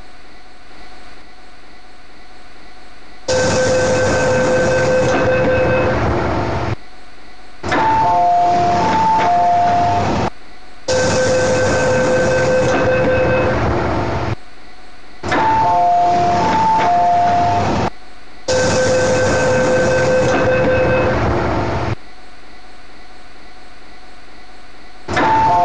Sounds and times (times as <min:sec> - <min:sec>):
Sliding door: 0:07.7 - 0:10.3, 0:15.3 - 0:17.9, 0:25.1 - 0:25.6.